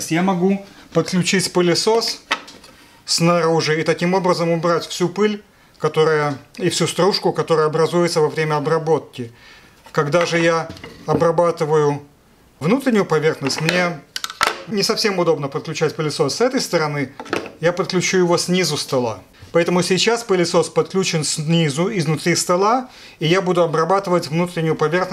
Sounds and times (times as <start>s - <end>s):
Speech: 0.0s - 2.3s, 3.1s - 25.1s.